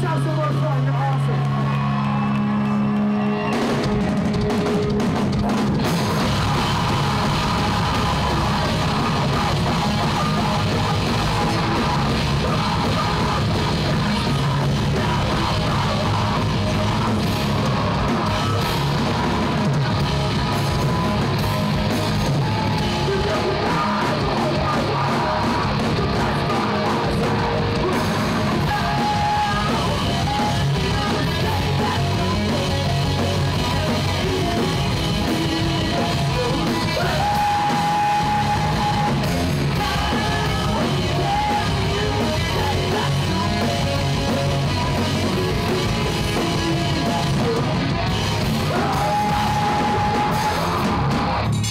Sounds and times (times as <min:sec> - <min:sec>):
Music: 0:00.0 - 0:51.7.